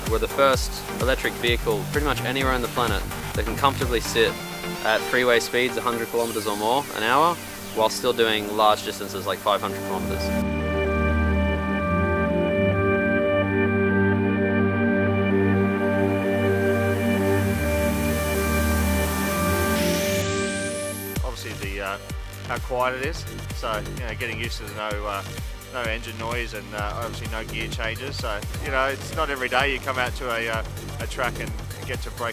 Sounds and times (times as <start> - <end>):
Speech: 0.0 - 10.4, 21.2 - 32.3
Music: 0.0 - 32.3.